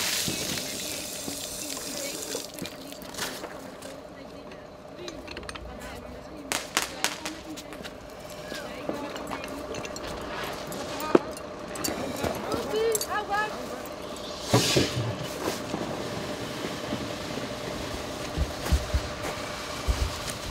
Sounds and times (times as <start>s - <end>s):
Speech: 0.7s - 9.8s.